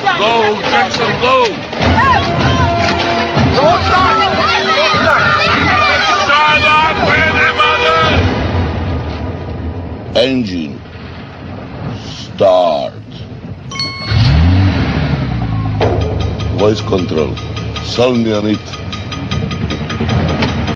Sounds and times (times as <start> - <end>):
Car: 13.7 - 16.3
Medium engine (mid frequency): 13.9 - 16.4
Accelerating, revving, vroom: 14.1 - 15.5
Speech: 16.6 - 18.8.